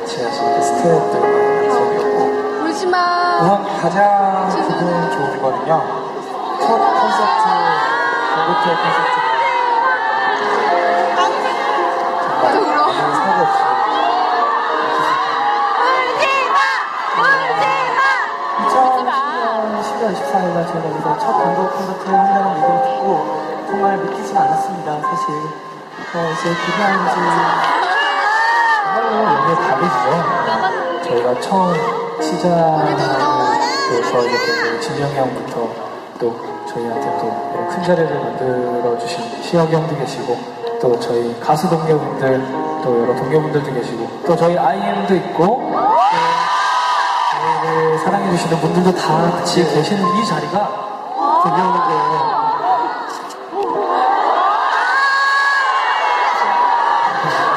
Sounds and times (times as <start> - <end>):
Music: 0.0 - 54.8.